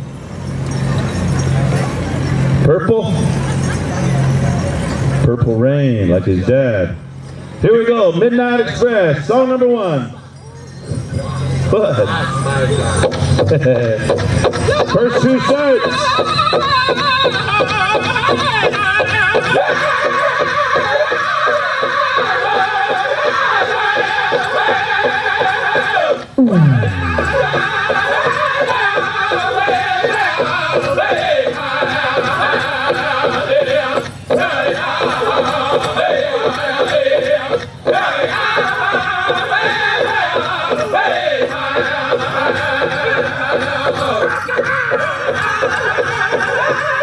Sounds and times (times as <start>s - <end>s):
Music: 10.4s - 47.0s.